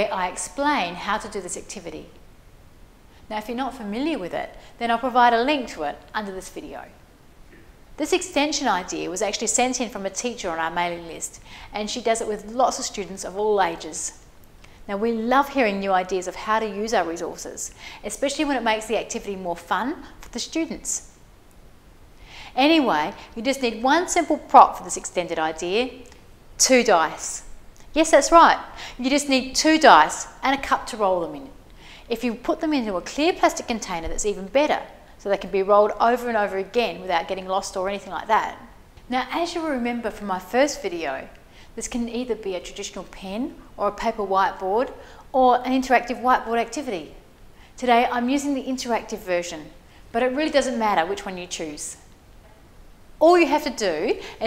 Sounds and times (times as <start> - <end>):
Speech: 0.0 - 2.2, 3.3 - 7.0, 8.0 - 14.2, 14.9 - 21.0, 22.6 - 26.0, 26.6 - 47.2, 47.8 - 52.0, 53.2 - 54.4.